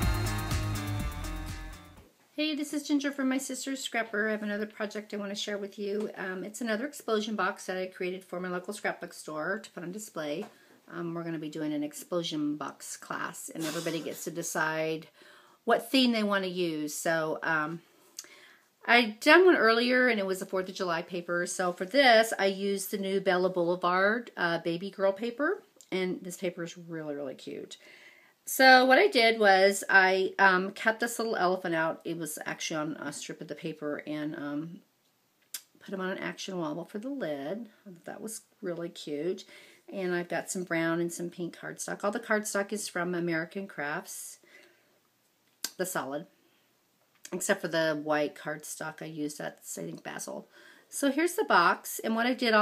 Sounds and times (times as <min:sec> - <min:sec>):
Speech: 0:02.4 - 0:17.8, 0:18.9 - 0:27.8, 0:28.5 - 0:34.9, 0:35.6 - 0:44.4, 0:45.7 - 0:46.3, 0:47.3 - 0:52.6.